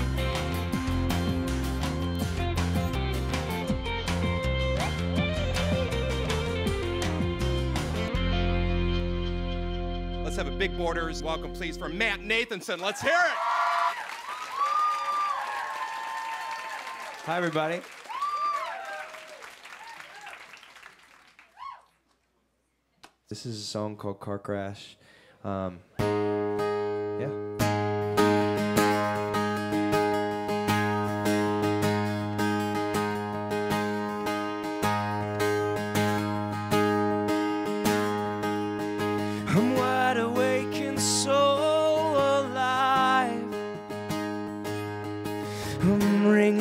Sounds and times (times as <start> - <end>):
Music: 0.0 - 12.6, 26.0 - 46.6
Speech: 10.3 - 13.4, 17.3 - 17.8, 23.3 - 25.8.